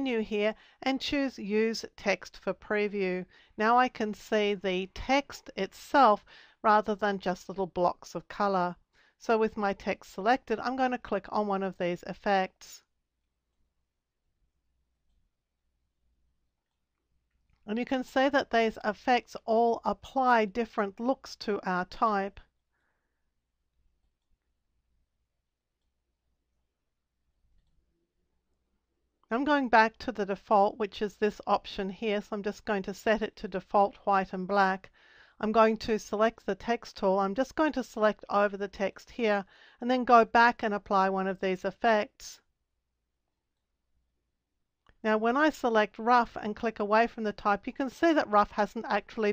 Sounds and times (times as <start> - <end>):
Speech: 0.0 - 12.8, 17.7 - 22.4, 29.3 - 42.4, 45.0 - 49.3
Inside, small room: 0.0 - 49.3.